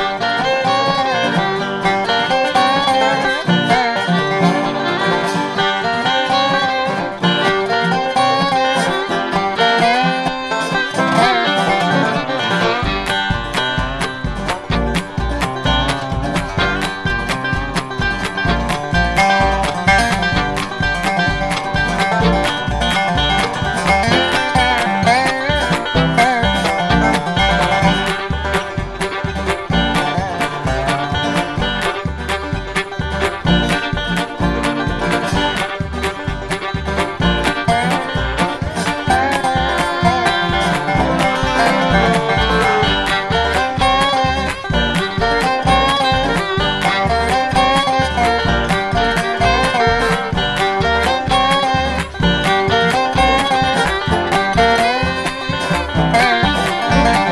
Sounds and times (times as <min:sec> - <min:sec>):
Music: 0:00.0 - 0:57.3.